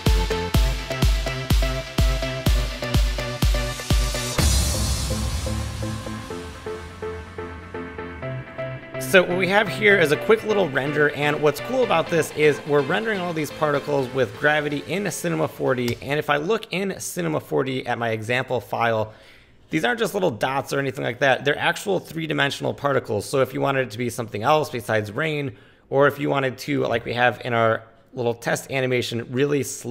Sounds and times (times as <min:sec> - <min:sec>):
Music: 0:00.0 - 0:16.0
Speech: 0:09.0 - 0:19.1, 0:19.7 - 0:29.9.